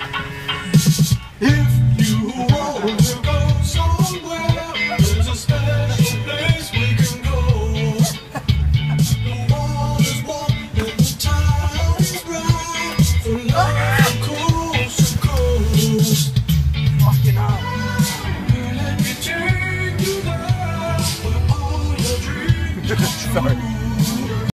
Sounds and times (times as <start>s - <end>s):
Music: 0.0s - 24.5s
Speech: 22.8s - 23.7s.